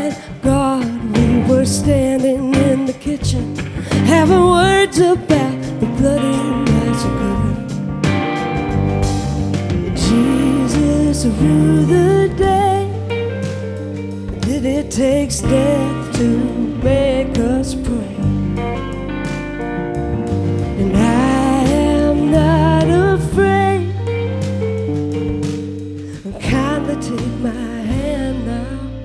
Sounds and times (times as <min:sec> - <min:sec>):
Guitar: 0:00.0 - 0:29.0
Singing: 0:09.9 - 0:13.0.